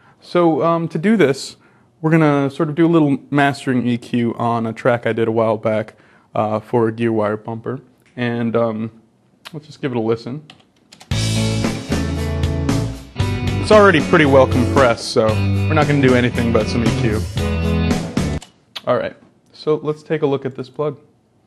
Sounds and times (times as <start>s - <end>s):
Speech: 0.2s - 10.5s, 13.6s - 17.2s, 18.8s - 21.1s
Music: 11.1s - 18.4s.